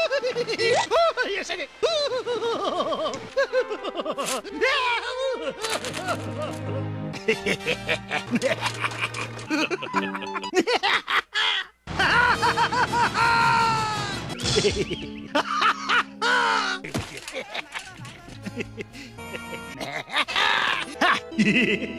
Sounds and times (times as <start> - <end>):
Music: 2.1 - 10.6, 11.9 - 21.9.